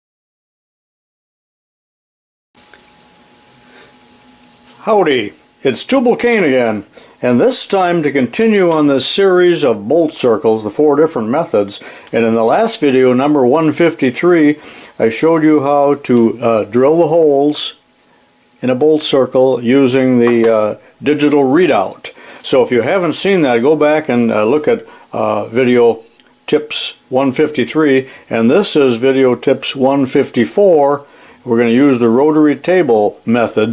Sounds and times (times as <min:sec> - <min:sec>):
Speech: 0:04.8 - 0:17.8, 0:18.6 - 0:33.7.